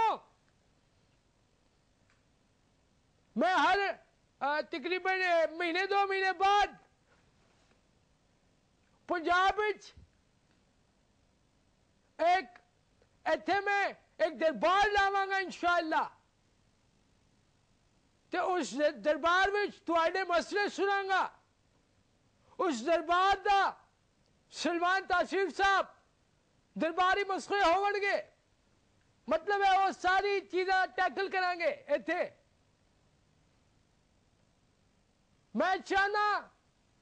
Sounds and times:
Male speech, man speaking: 0:00.0 - 0:00.3, 0:03.4 - 0:06.8, 0:09.1 - 0:10.0, 0:12.2 - 0:12.6, 0:13.3 - 0:16.2, 0:18.4 - 0:21.4, 0:22.6 - 0:23.9, 0:24.5 - 0:26.0, 0:26.8 - 0:28.4, 0:29.3 - 0:32.4, 0:35.6 - 0:36.6
Narration, monologue: 0:00.0 - 0:37.0.

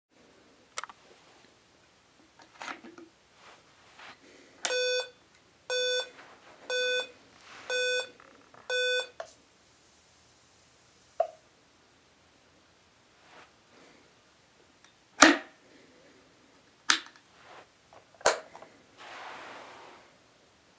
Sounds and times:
Inside, small room: 0:00.1 - 0:20.7.

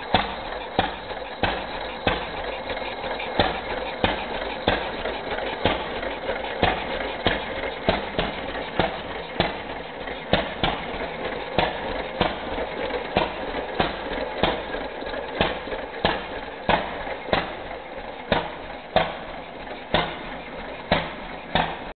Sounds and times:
Engine: 0:00.0 - 0:21.9.

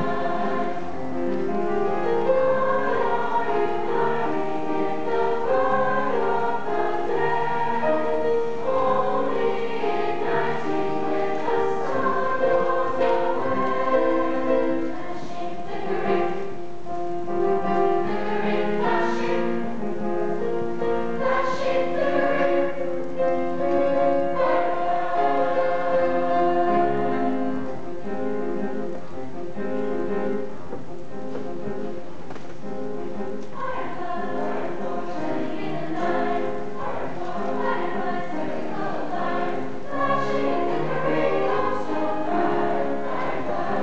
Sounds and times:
Choir: 0:00.0 - 0:27.8, 0:33.5 - 0:43.8.

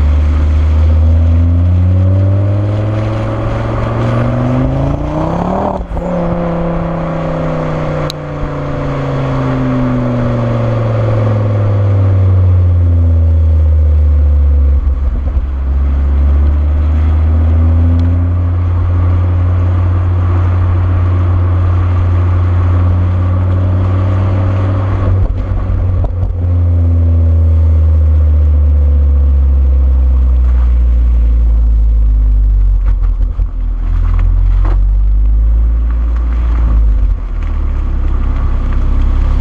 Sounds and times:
Car: 0:00.0 - 0:39.4.

